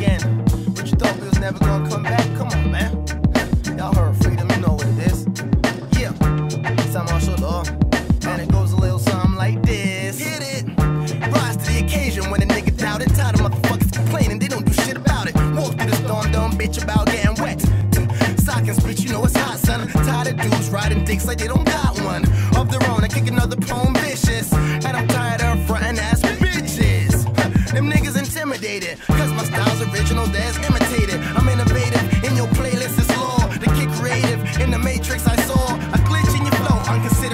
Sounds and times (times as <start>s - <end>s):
Music: 0.0s - 37.3s.